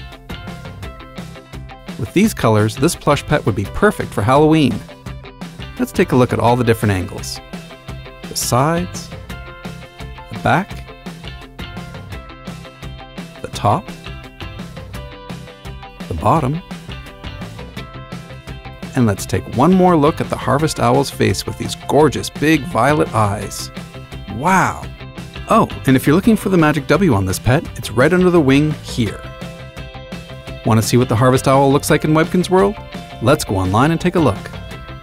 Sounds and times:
Music: 0:00.0 - 0:35.0
Speech: 0:02.0 - 0:04.9, 0:05.8 - 0:07.4, 0:08.3 - 0:09.2, 0:10.3 - 0:10.8, 0:13.4 - 0:14.0, 0:16.1 - 0:16.6, 0:18.9 - 0:23.7, 0:24.3 - 0:24.9, 0:25.5 - 0:29.3, 0:30.6 - 0:34.6.

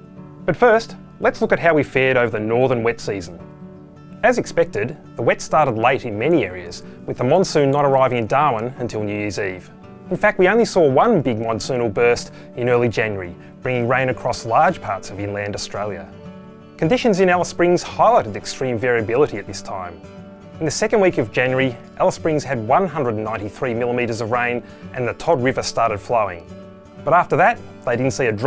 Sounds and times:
Music: 0:00.0 - 0:28.4
Speech: 0:00.5 - 0:03.4, 0:04.2 - 0:16.2, 0:16.8 - 0:20.0, 0:20.6 - 0:28.4.

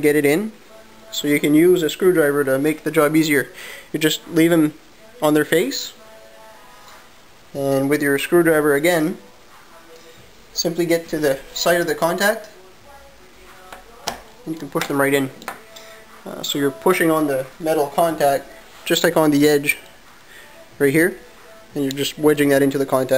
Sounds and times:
Inside, small room: 0:00.0 - 0:23.1
Music: 0:00.0 - 0:23.1
Speech: 0:01.1 - 0:06.0, 0:07.6 - 0:09.2, 0:10.6 - 0:12.6, 0:14.4 - 0:15.4, 0:16.3 - 0:19.8, 0:20.8 - 0:21.2, 0:21.8 - 0:23.1.

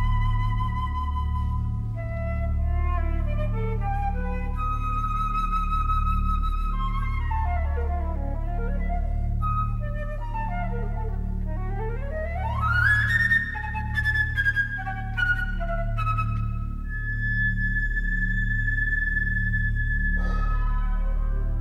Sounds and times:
Classical music: 0:00.0 - 0:21.6
Inside, large room or hall: 0:00.0 - 0:21.6.

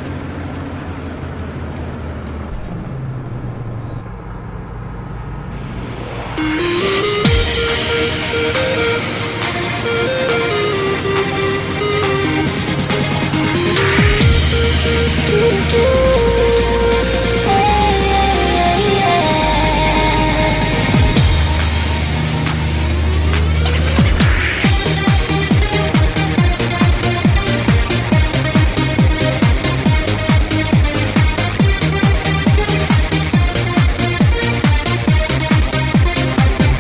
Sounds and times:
Music: 0:05.8 - 0:36.8.

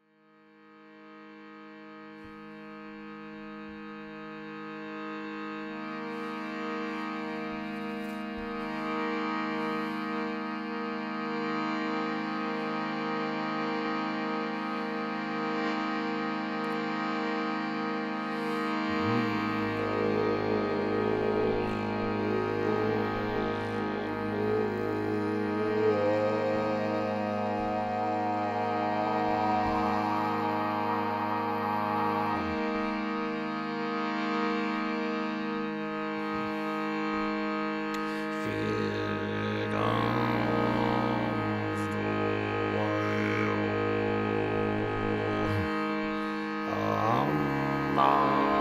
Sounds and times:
Music: 0:00.0 - 0:48.6.

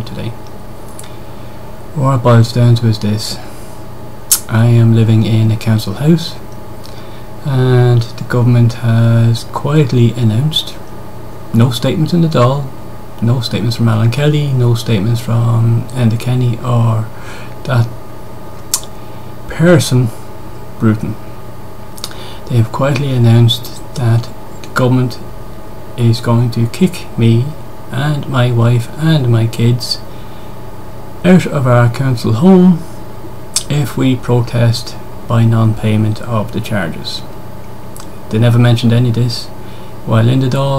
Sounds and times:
Speech: 0:00.0 - 0:00.4, 0:02.0 - 0:03.5, 0:04.3 - 0:06.4, 0:07.4 - 0:10.8, 0:11.5 - 0:18.0, 0:19.5 - 0:20.2, 0:20.8 - 0:21.2, 0:22.5 - 0:25.2, 0:26.0 - 0:30.1, 0:31.2 - 0:32.9, 0:33.6 - 0:37.3, 0:38.3 - 0:40.7.

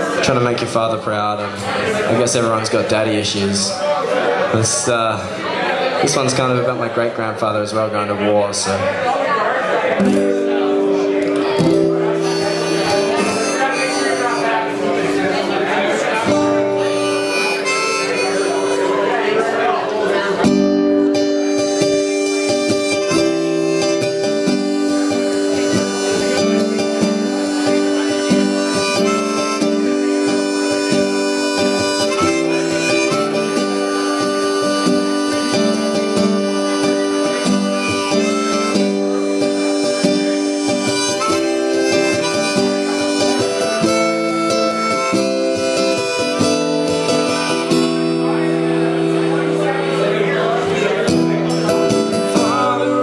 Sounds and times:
Harmonica: 0:10.9 - 0:19.9, 0:20.6 - 0:53.0
Wind instrument, woodwind instrument: 0:11.8 - 0:15.5, 0:16.3 - 0:19.5, 0:21.0 - 0:49.0.

